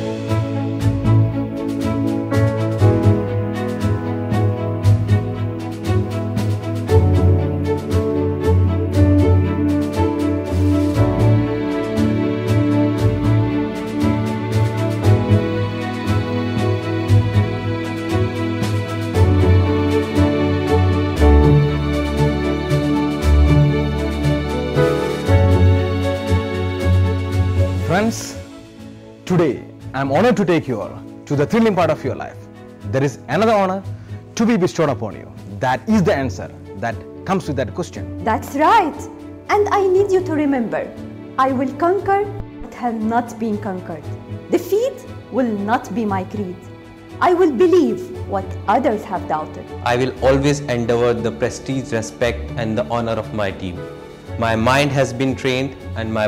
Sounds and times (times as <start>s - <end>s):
Background music: 0.0s - 56.2s.